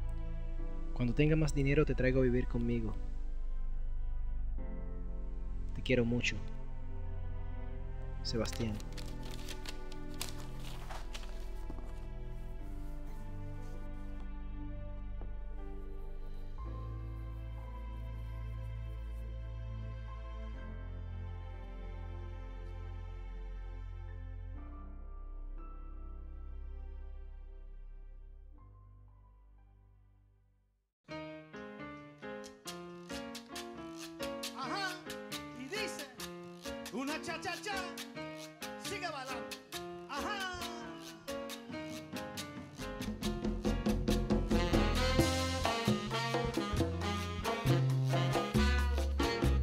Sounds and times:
Background music: 0:00.0 - 0:29.9, 0:31.1 - 0:49.6.

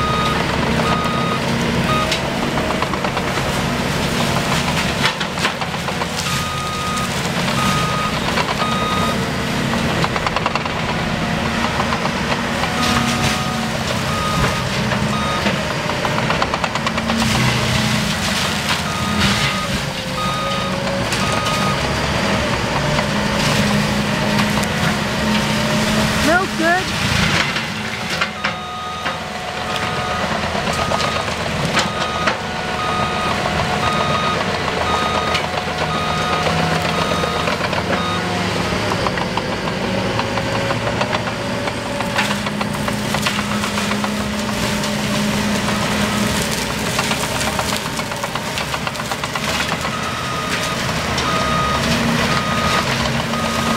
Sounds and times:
Speech: 0:26.2 - 0:27.0.

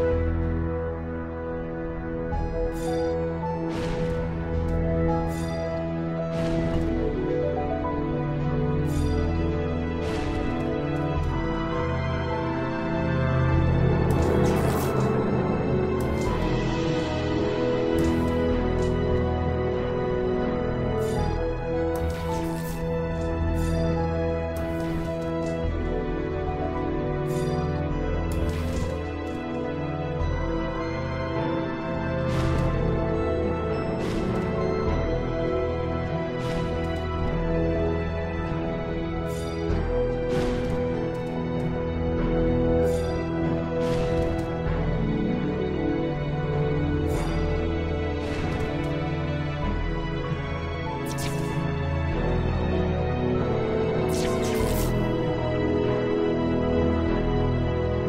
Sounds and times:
Music: 0:00.0 - 0:58.0.

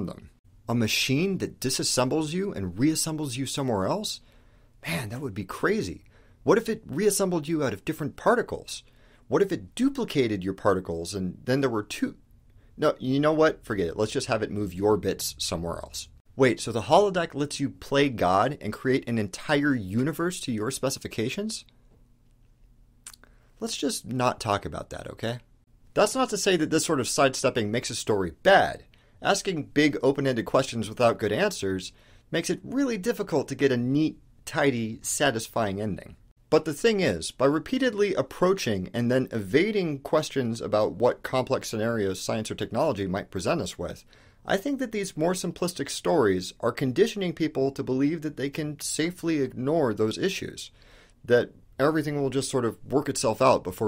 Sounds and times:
Speech: 0:00.0 - 0:04.2, 0:04.8 - 0:12.2, 0:12.8 - 0:21.7, 0:23.1 - 0:50.7, 0:51.3 - 0:53.8.

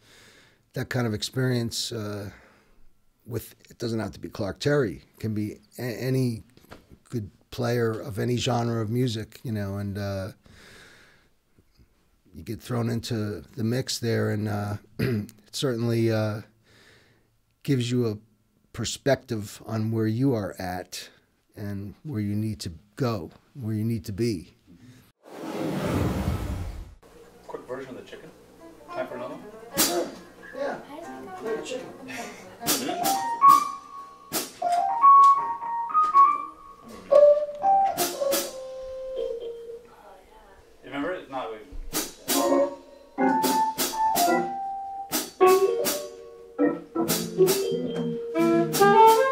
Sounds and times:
Speech: 0:00.8 - 0:02.4, 0:03.3 - 0:06.4, 0:07.1 - 0:10.4, 0:12.3 - 0:14.8, 0:17.6 - 0:18.2, 0:18.8 - 0:24.6, 0:27.5 - 0:32.9, 0:39.9 - 0:41.7.

